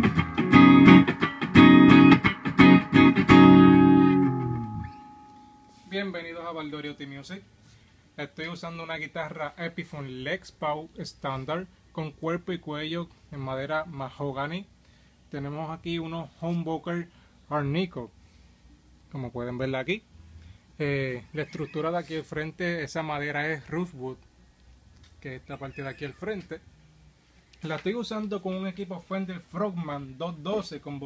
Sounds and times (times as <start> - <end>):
Speech: 5.9 - 7.5, 8.2 - 14.7, 15.3 - 18.2, 19.1 - 20.1, 20.8 - 24.2, 25.2 - 26.7, 27.6 - 31.0.